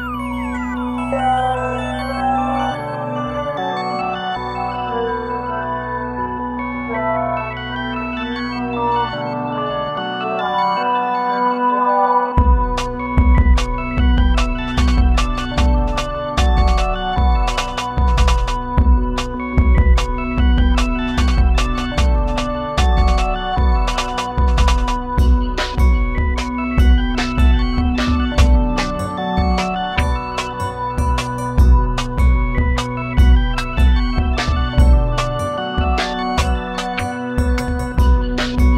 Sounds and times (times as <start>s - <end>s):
Electronic dance music: 0.0s - 3.7s, 12.4s - 38.7s
Electronica: 0.0s - 38.7s.